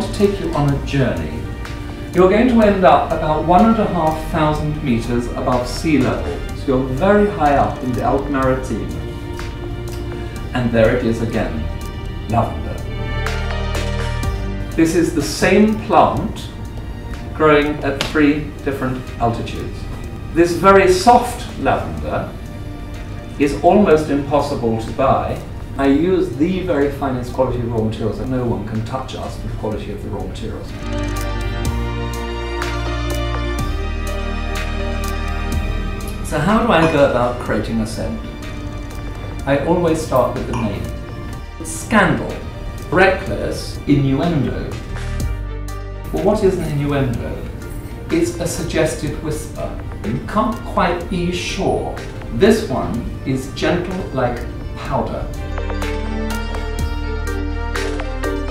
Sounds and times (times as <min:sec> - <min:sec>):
Speech: 0:00.0 - 0:01.4, 0:02.2 - 0:09.1, 0:10.5 - 0:11.7, 0:12.3 - 0:12.9, 0:14.8 - 0:16.6, 0:17.4 - 0:22.4, 0:23.4 - 0:30.8, 0:36.2 - 0:38.2, 0:39.4 - 0:41.0, 0:41.6 - 0:44.8, 0:46.1 - 0:55.4
Music: 0:00.0 - 0:58.5.